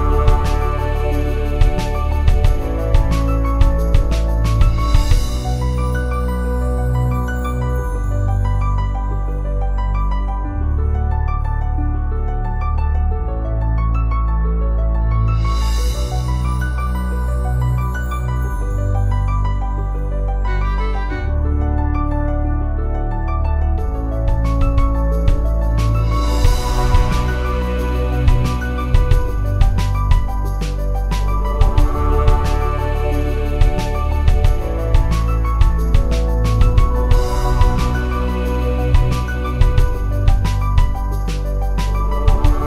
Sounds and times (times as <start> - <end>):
Ambient music: 0.0 - 42.6
Background music: 0.0 - 42.6.